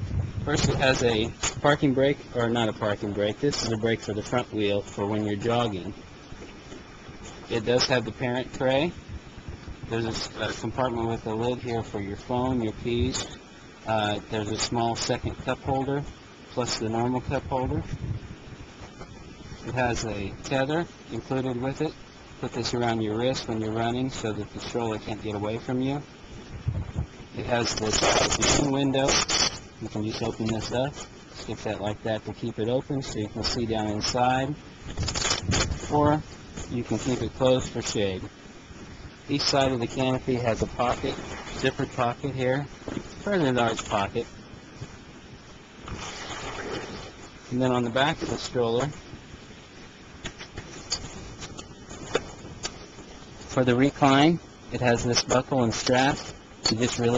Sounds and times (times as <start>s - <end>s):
Speech: 0.4s - 6.0s, 7.5s - 9.0s, 9.9s - 17.9s, 19.7s - 26.1s, 27.4s - 29.2s, 29.8s - 34.6s, 35.8s - 38.3s, 39.3s - 44.3s, 47.5s - 49.0s, 53.5s - 57.1s.